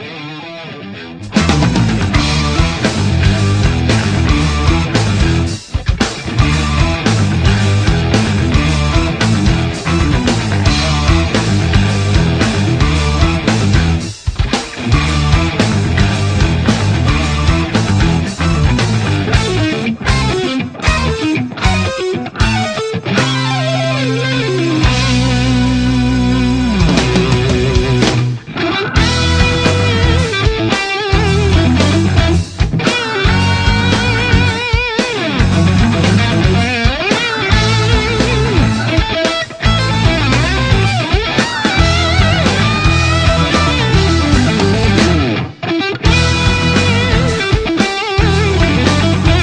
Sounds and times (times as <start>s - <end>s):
Music: 0.0s - 49.4s.